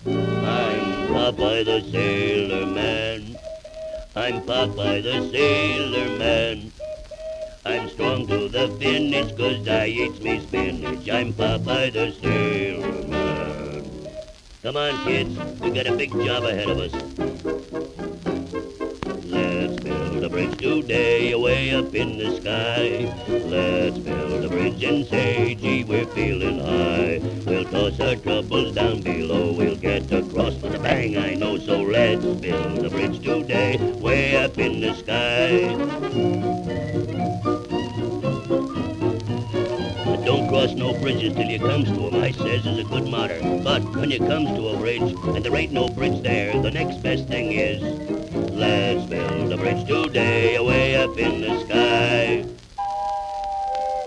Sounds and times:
Radio: 0.0s - 36.8s, 39.5s - 54.0s
Orchestra: 0.0s - 54.0s.

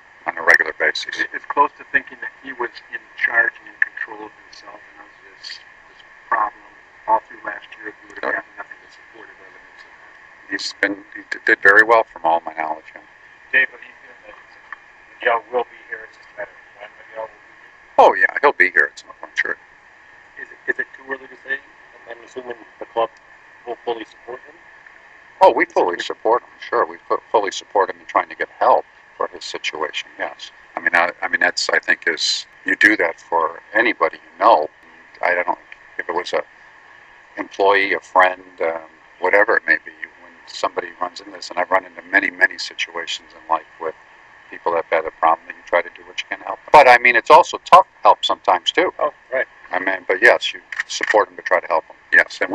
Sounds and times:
Male speech, man speaking: 0.3s - 5.6s, 6.3s - 9.9s, 10.5s - 14.5s, 15.2s - 17.4s, 18.0s - 19.6s, 20.4s - 23.1s, 23.7s - 24.6s, 25.4s - 36.5s, 37.4s - 52.5s.

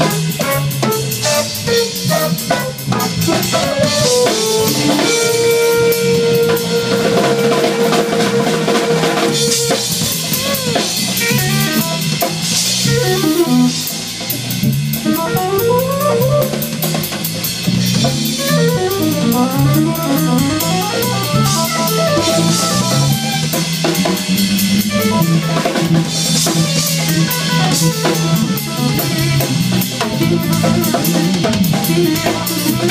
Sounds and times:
Drum kit: 0.0s - 32.9s
Jazz: 0.0s - 32.9s.

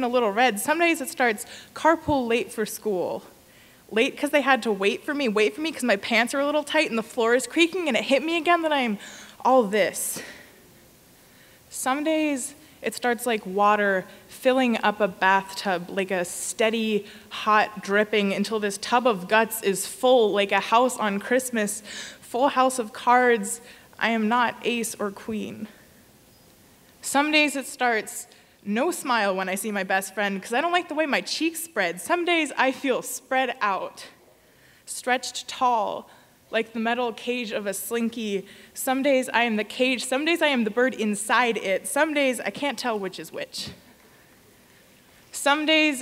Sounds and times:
Speech: 0.0s - 3.3s, 3.9s - 10.3s, 11.7s - 25.8s, 27.0s - 34.2s, 34.9s - 43.8s, 45.3s - 46.0s.

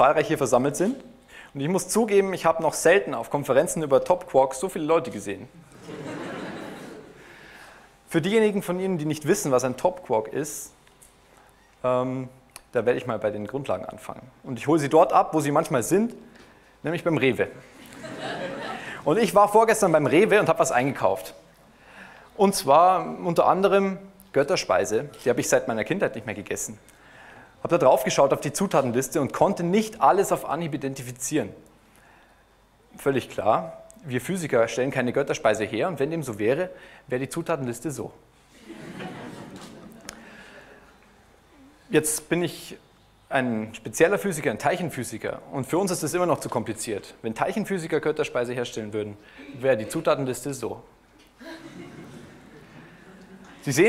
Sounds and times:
Speech: 0.0s - 5.5s, 8.1s - 10.8s, 11.8s - 16.2s, 16.8s - 17.6s, 19.0s - 21.4s, 22.4s - 26.8s, 27.6s - 31.6s, 33.0s - 38.2s, 41.6s - 50.9s, 53.6s - 53.8s.

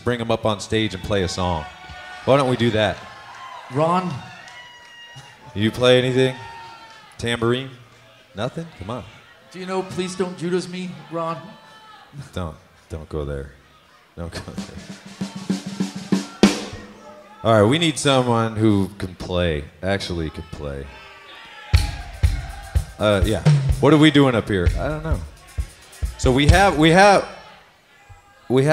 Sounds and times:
Speech: 0.0s - 1.7s, 2.3s - 3.0s, 5.5s - 6.4s, 14.2s - 14.9s, 17.1s - 21.0s, 23.0s - 27.3s, 28.0s - 28.7s
Drum kit: 14.4s - 17.4s, 21.8s - 27.3s.

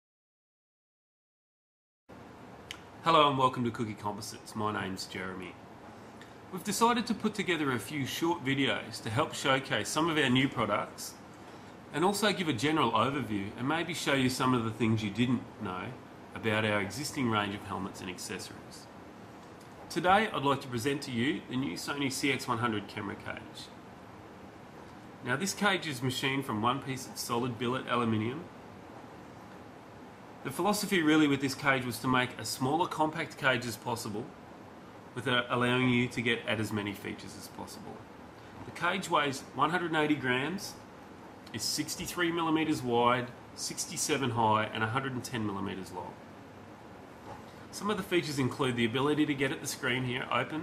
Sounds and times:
Speech: 3.0s - 5.6s, 6.5s - 11.2s, 11.9s - 18.9s, 19.9s - 23.8s, 25.2s - 28.6s, 30.4s - 34.4s, 35.1s - 38.1s, 38.7s - 40.9s, 41.5s - 46.3s, 47.7s - 50.6s.

